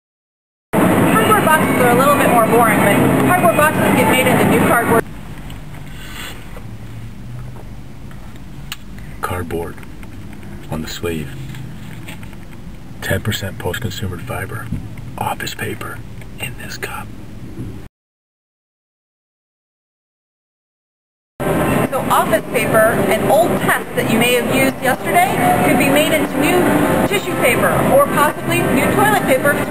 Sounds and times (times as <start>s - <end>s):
Speech: 1.2s - 5.0s, 9.2s - 9.8s, 13.0s - 17.1s, 21.9s - 29.7s.